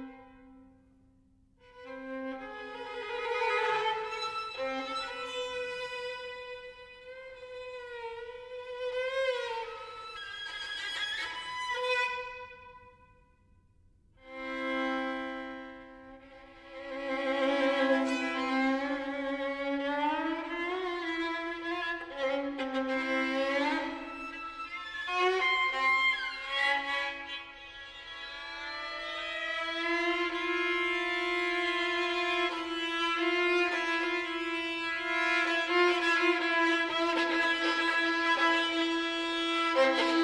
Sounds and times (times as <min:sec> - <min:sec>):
Violin, fiddle: 0:01.6 - 0:13.0, 0:14.2 - 0:40.2.